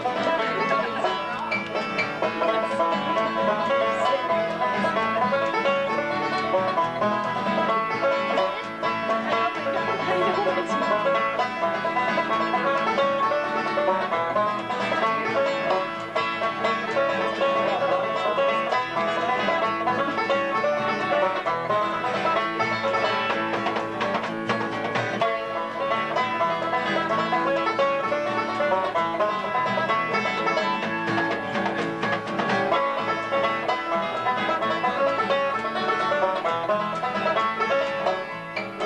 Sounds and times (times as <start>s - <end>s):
Musical instrument: 0.0s - 38.8s.